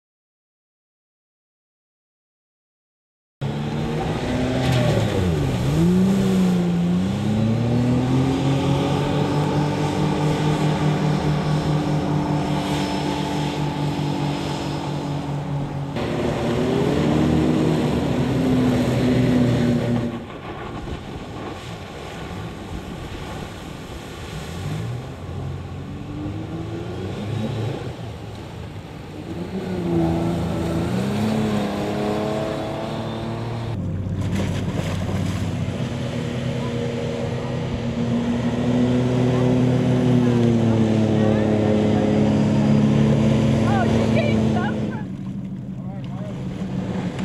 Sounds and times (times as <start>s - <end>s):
Boat, Water vehicle: 3.4s - 47.2s
Outside, rural or natural: 3.4s - 47.2s.